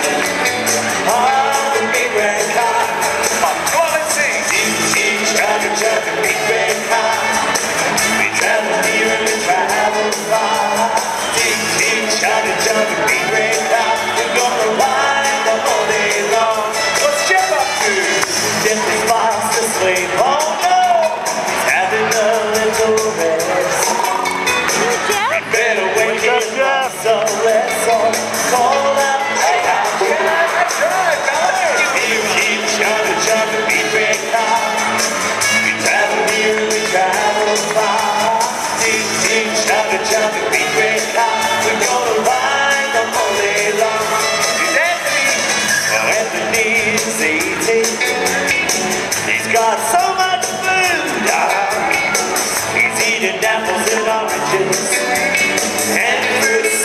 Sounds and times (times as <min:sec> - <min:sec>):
Music: 0:00.0 - 0:56.8.